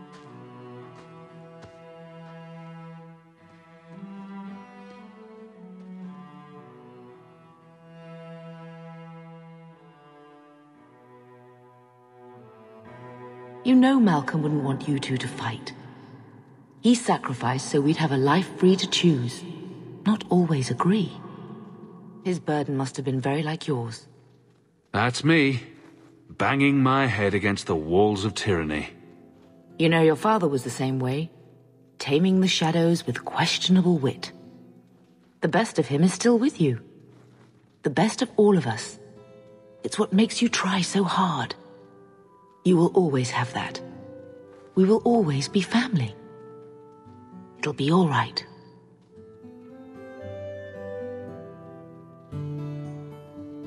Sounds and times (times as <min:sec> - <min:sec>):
Cello: 0:00.0 - 0:53.6
Speech: 0:13.7 - 0:15.8, 0:16.8 - 0:21.4, 0:22.3 - 0:24.0, 0:25.0 - 0:25.7, 0:26.3 - 0:29.0, 0:29.8 - 0:31.3, 0:32.0 - 0:34.3, 0:35.4 - 0:36.8, 0:37.9 - 0:39.0, 0:39.8 - 0:41.6, 0:42.7 - 0:43.9, 0:44.8 - 0:46.2, 0:47.6 - 0:48.5.